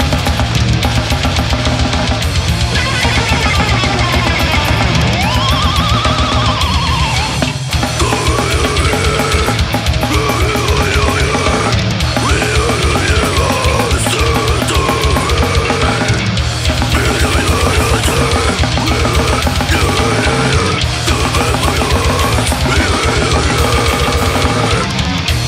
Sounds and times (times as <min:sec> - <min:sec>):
Music: 0:00.0 - 0:25.4.